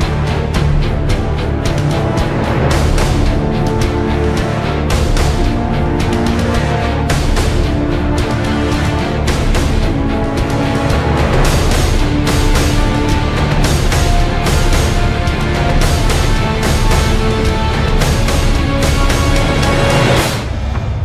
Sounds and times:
Background music: 0.0 - 21.0.

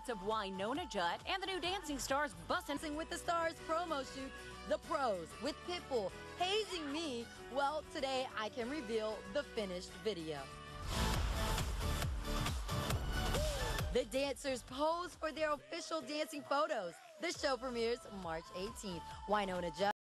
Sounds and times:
Speech: 14.0 - 20.0.

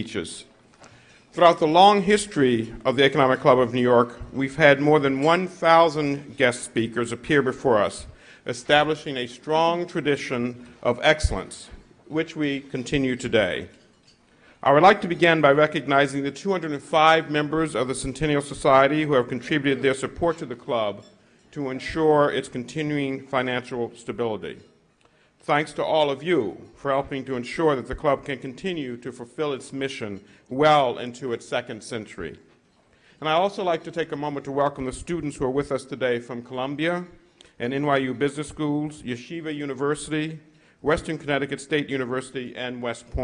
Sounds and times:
Male speech, man speaking: 0.0 - 0.5, 1.4 - 13.7, 14.6 - 24.7, 25.4 - 32.5, 33.2 - 43.2
Narration, monologue: 0.0 - 43.2.

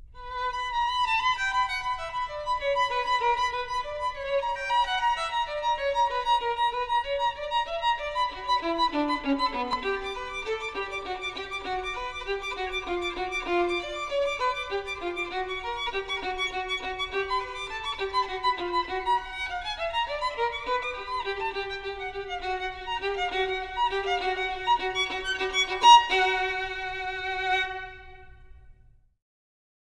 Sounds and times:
Violin, fiddle: 0.0 - 28.5.

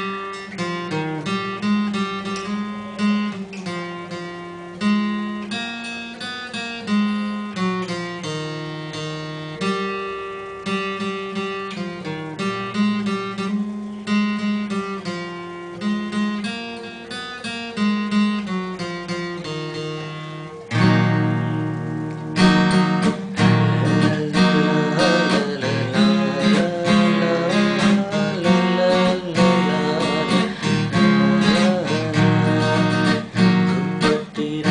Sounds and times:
Acoustic guitar: 0.0 - 34.7
Strum: 0.0 - 34.7.

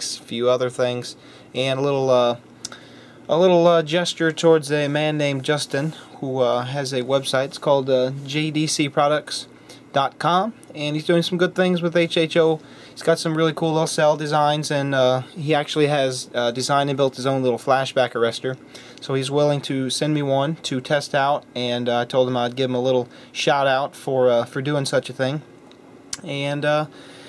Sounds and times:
Speech: 0.0 - 2.4, 3.3 - 25.5, 26.2 - 26.9.

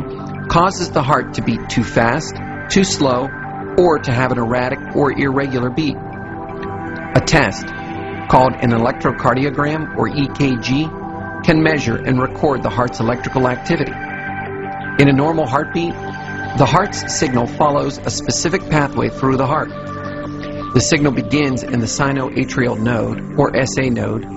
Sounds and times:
Music: 0.0 - 24.3
Speech: 0.5 - 6.0, 7.2 - 7.7, 8.3 - 10.9, 11.5 - 14.0, 15.0 - 16.0, 16.6 - 19.7, 20.8 - 24.3.

